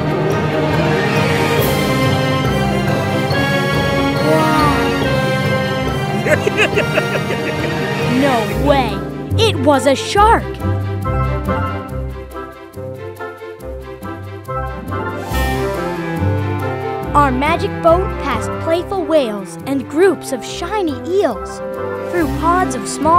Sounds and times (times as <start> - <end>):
Music: 0.0 - 23.1
Speech: 4.2 - 5.0, 8.1 - 10.6, 17.2 - 23.1.